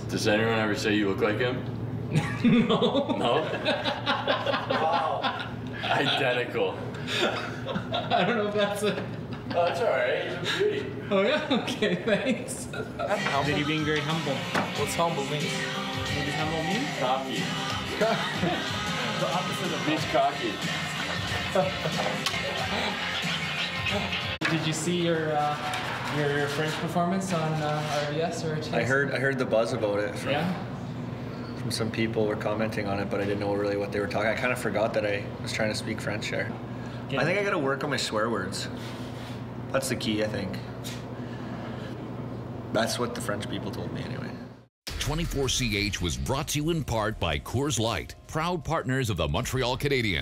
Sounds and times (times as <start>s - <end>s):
Music: 13.2s - 26.9s, 44.9s - 50.2s.